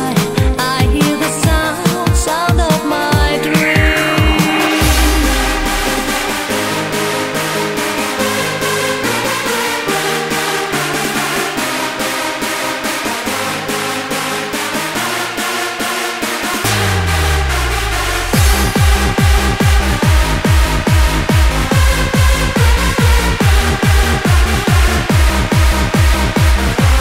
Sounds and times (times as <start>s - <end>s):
Music: 0.0s - 27.0s.